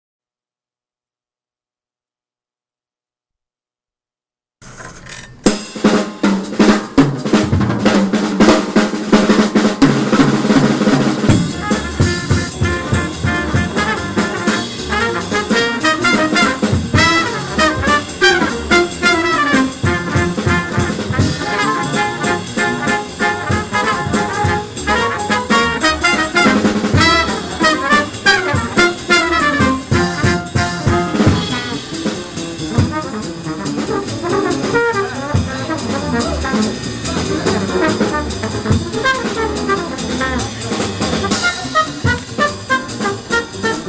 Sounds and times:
Music: 0:05.3 - 0:43.8.

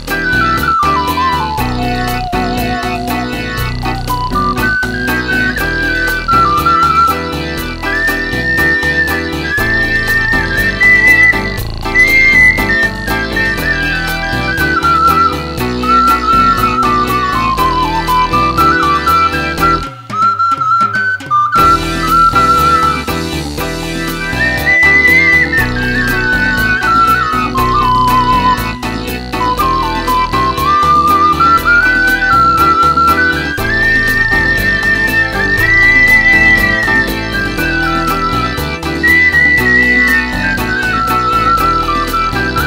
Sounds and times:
Musical instrument: 0:00.0 - 0:42.6.

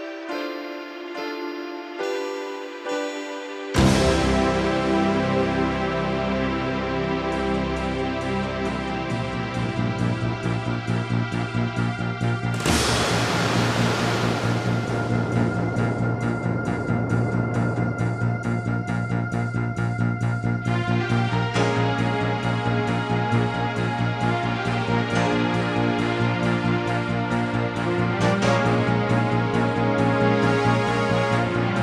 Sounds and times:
Music: 0:00.0 - 0:31.8.

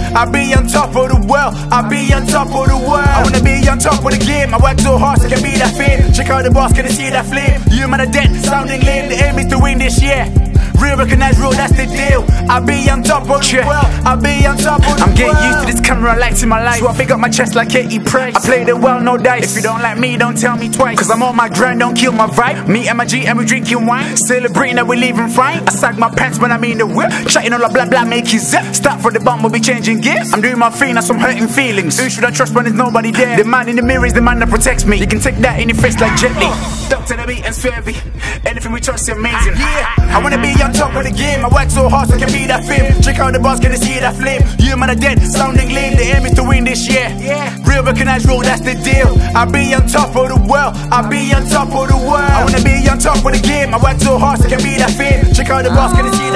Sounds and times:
Music: 0:00.0 - 0:56.3
Rapping: 0:00.0 - 0:56.3.

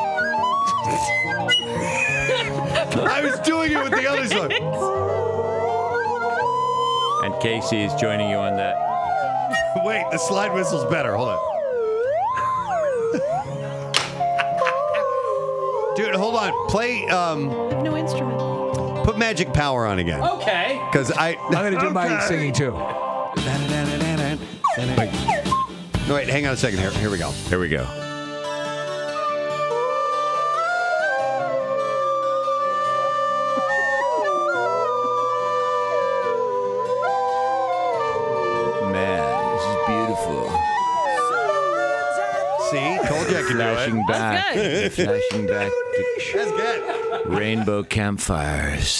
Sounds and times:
Music: 0:00.0 - 0:48.9
Speech: 0:26.1 - 0:27.9, 0:38.6 - 0:40.6, 0:42.6 - 0:48.9.

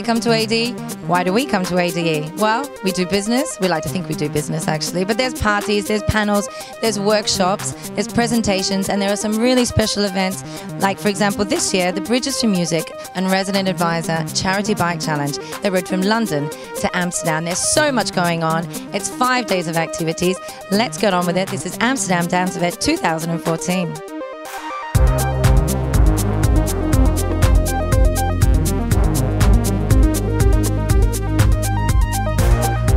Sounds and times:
Speech: 0:00.0 - 0:24.0
Music: 0:00.0 - 0:32.9.

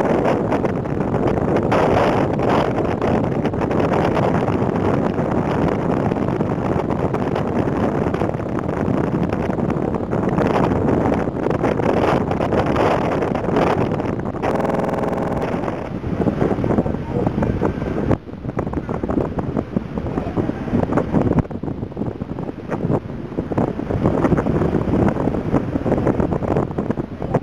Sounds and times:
Speech: 0:16.8 - 0:17.7, 0:20.1 - 0:20.7.

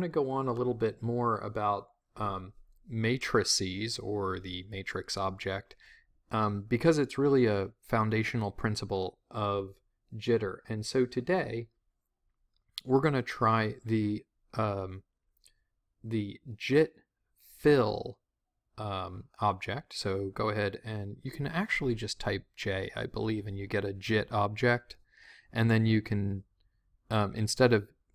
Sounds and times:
Speech: 0:00.0 - 0:11.7, 0:12.8 - 0:15.1, 0:16.0 - 0:18.2, 0:18.8 - 0:26.5, 0:27.1 - 0:28.0.

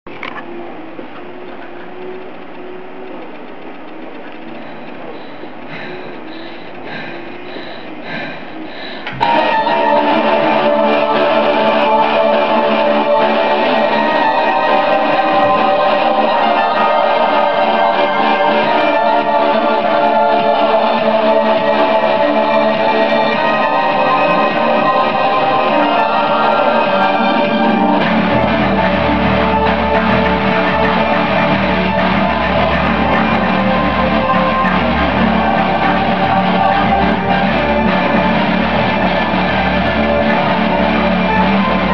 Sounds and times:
Music: 0:00.1 - 0:41.9.

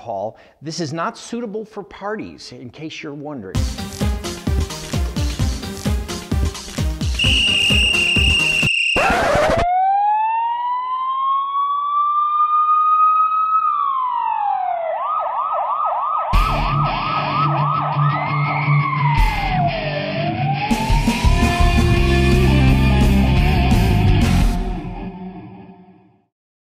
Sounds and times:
Rock and roll: 0:16.4 - 0:25.1.

